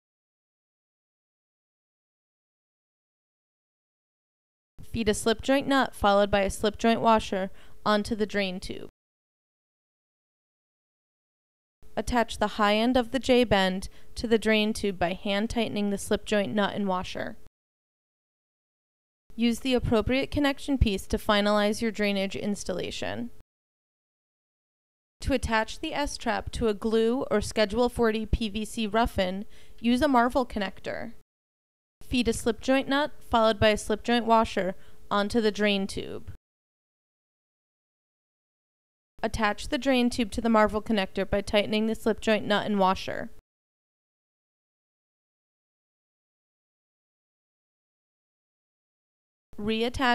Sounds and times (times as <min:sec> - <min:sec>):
Speech: 0:04.8 - 0:08.9, 0:12.0 - 0:17.4, 0:19.4 - 0:23.4, 0:25.2 - 0:31.2, 0:32.0 - 0:36.4, 0:39.2 - 0:43.4, 0:49.6 - 0:50.1.